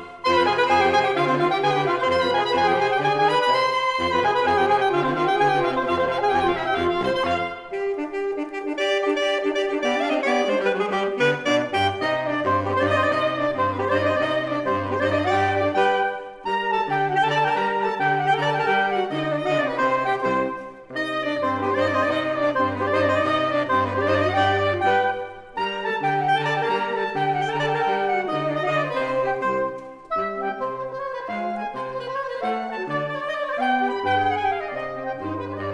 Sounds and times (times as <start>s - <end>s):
Brass instrument: 0.0s - 35.7s
Saxophone: 0.0s - 35.7s.